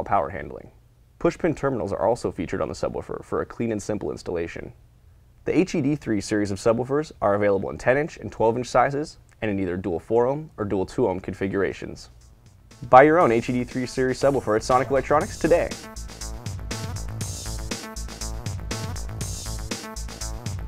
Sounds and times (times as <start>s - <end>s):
Speech: 0.0s - 4.8s, 5.5s - 12.2s, 12.8s - 15.8s
Music: 12.0s - 20.6s.